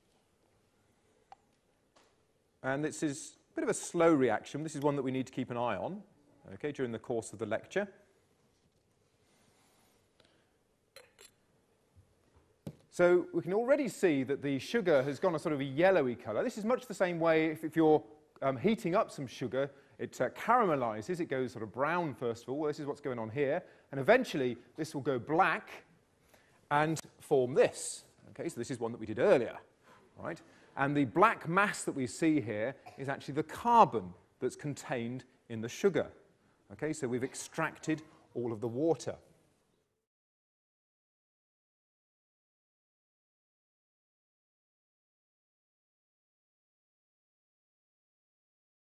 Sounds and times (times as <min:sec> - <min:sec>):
Speech: 0:02.6 - 0:08.1, 0:12.9 - 0:25.9, 0:26.7 - 0:39.3.